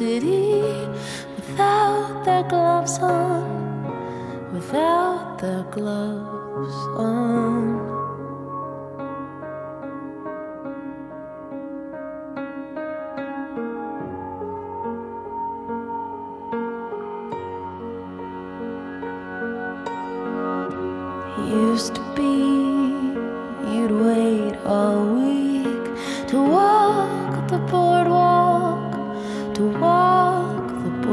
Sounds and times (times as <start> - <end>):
Music: 0.0 - 31.1.